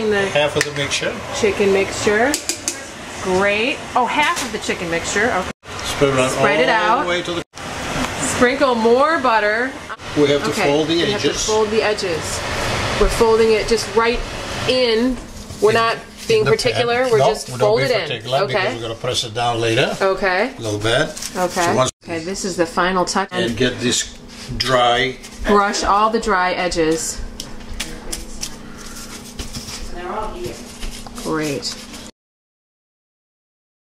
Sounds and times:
Speech: 0:08.3 - 0:12.2, 0:13.2 - 0:20.0, 0:20.6 - 0:27.2.

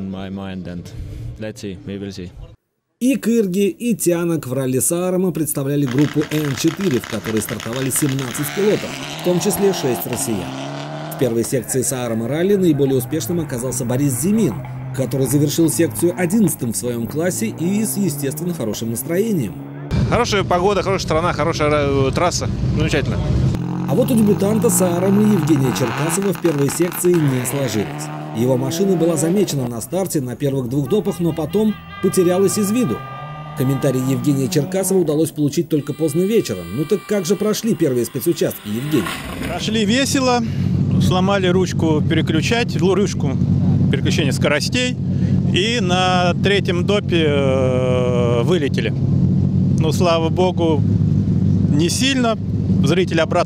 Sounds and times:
Race car, auto racing: 0:05.6 - 0:53.4.

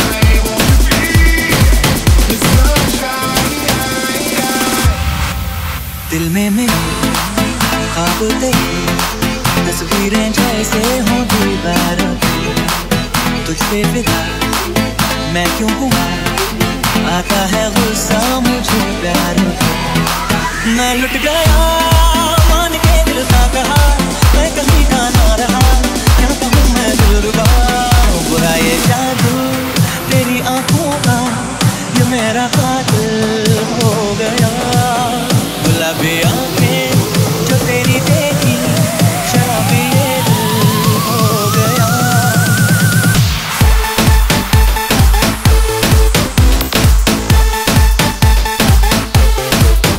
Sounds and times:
Music: 0:00.0 - 0:49.9.

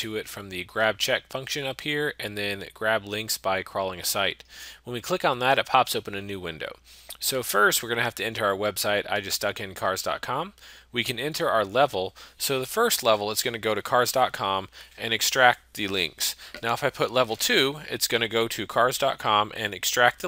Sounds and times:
Speech: 0:00.0 - 0:20.2.

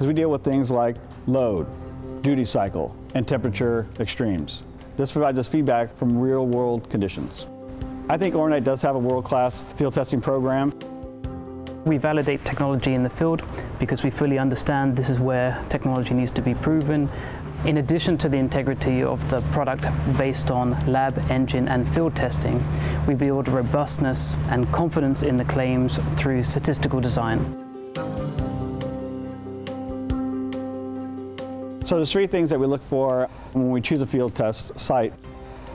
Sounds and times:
Speech: 0:00.0 - 0:07.5, 0:08.1 - 0:10.8, 0:11.8 - 0:17.1, 0:17.7 - 0:27.5, 0:31.8 - 0:35.2.

